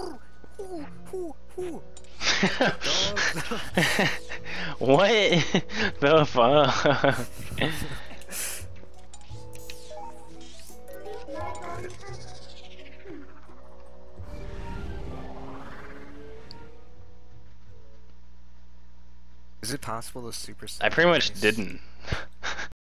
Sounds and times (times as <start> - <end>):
Music: 0.0 - 19.0
Speech: 19.6 - 21.8.